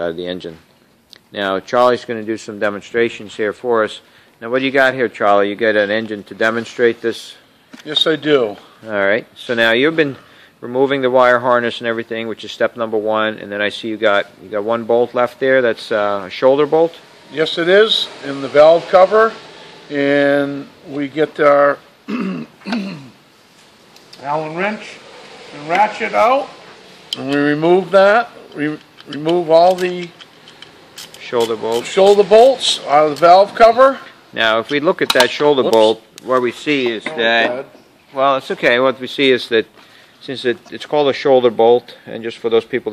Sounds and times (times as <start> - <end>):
Speech: 0.0 - 0.6, 1.3 - 21.8, 24.2 - 26.6, 27.2 - 30.1, 31.2 - 42.9.